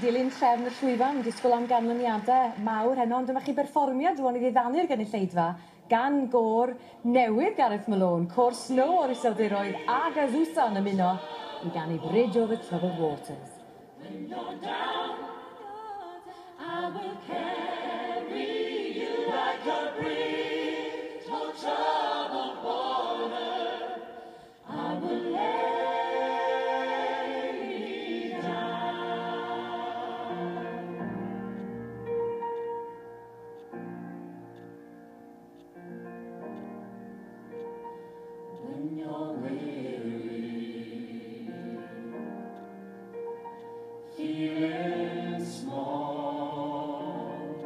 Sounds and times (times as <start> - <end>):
Music: 8.3 - 47.6.